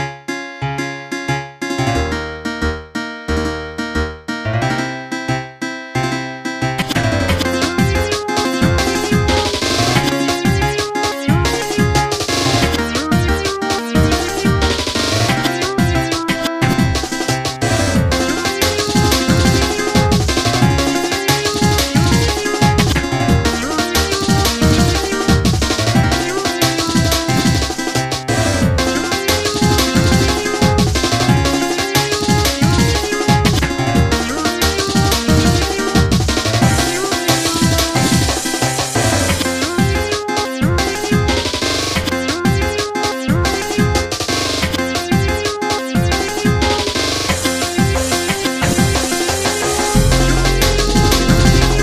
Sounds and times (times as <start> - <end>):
Music: 0.0 - 51.8.